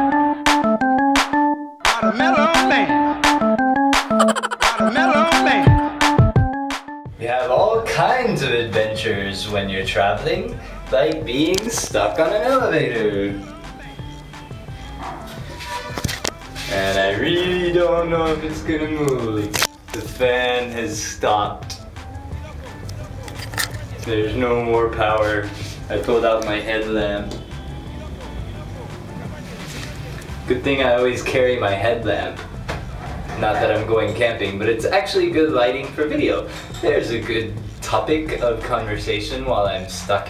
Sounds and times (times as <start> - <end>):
Music: 0.0 - 40.3
Speech: 7.2 - 13.5, 16.7 - 21.8, 24.0 - 27.4, 30.5 - 32.4, 33.4 - 40.3.